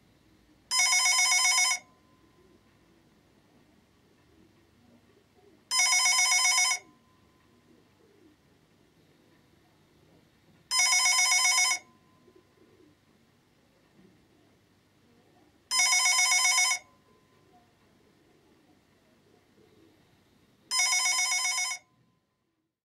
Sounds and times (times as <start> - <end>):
Telephone bell ringing: 0.7 - 2.1, 5.7 - 7.2, 10.7 - 12.3, 15.7 - 17.0, 20.7 - 22.0.